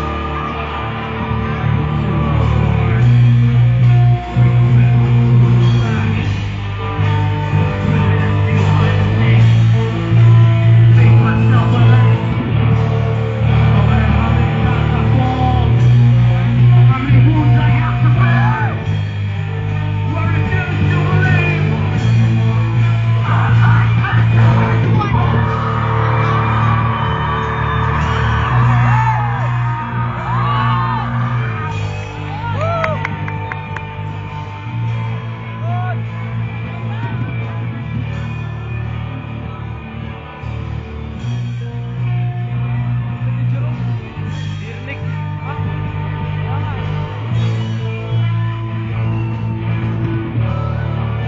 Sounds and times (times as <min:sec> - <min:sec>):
Crowd: 0:00.0 - 0:51.2
Music: 0:00.0 - 0:51.2
Speech: 0:20.1 - 0:21.8, 0:43.5 - 0:47.1.